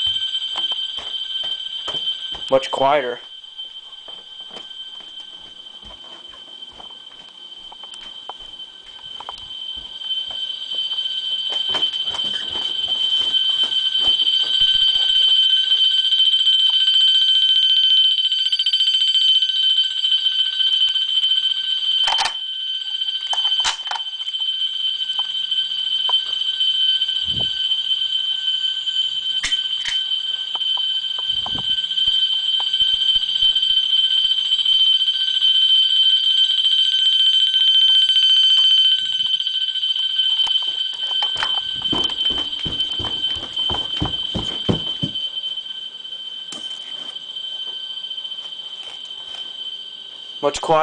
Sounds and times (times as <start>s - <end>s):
Alarm clock: 0.0s - 50.8s.